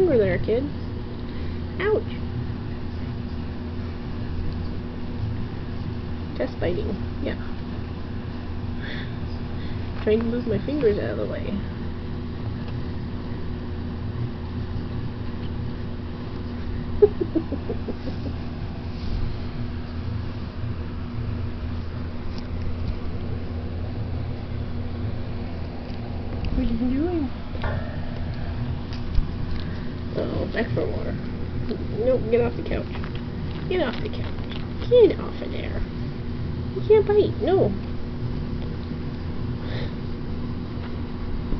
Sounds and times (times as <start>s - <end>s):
Speech: 0.0s - 0.8s, 1.8s - 2.2s, 6.4s - 7.5s, 10.0s - 11.7s, 26.5s - 27.4s, 30.2s - 32.9s, 33.7s - 35.8s, 36.8s - 37.8s
Inside, small room: 0.0s - 41.5s.